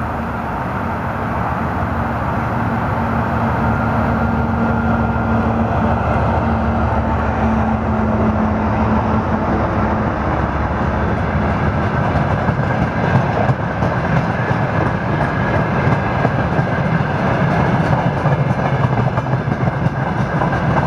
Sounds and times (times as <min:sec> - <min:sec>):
Train: 0:00.0 - 0:20.8.